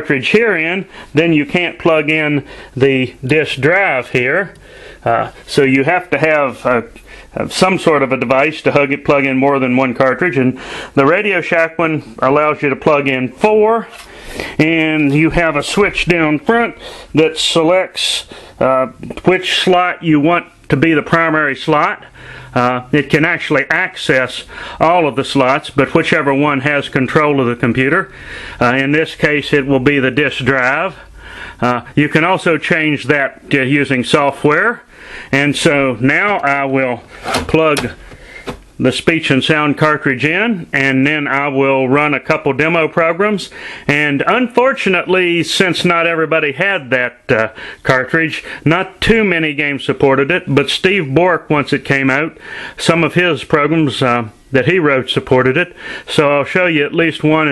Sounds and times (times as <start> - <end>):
Male speech, man speaking: 0.0 - 14.0, 14.6 - 38.0, 38.8 - 57.5.